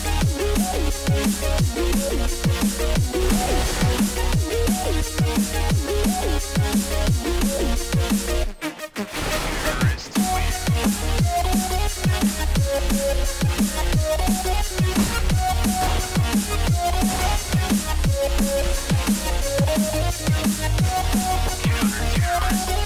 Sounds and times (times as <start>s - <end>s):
Music: 0.0s - 22.8s.